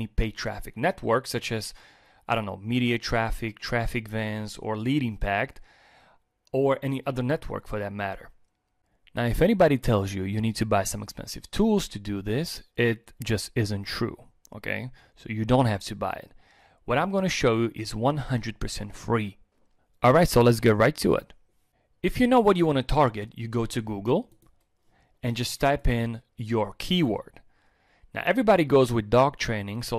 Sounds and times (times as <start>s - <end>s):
Speech: 0.0s - 5.6s, 6.5s - 8.4s, 9.1s - 19.4s, 20.0s - 21.4s, 22.0s - 24.4s, 25.2s - 27.4s, 28.1s - 29.9s.